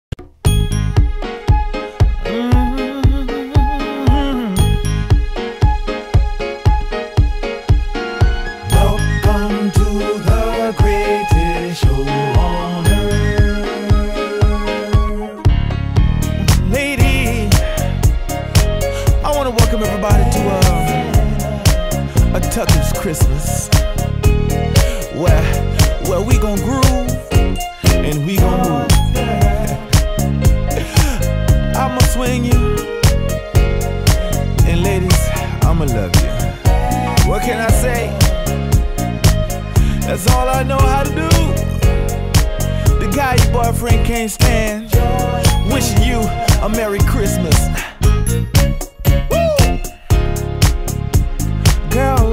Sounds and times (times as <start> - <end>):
Music: 0.0 - 52.3.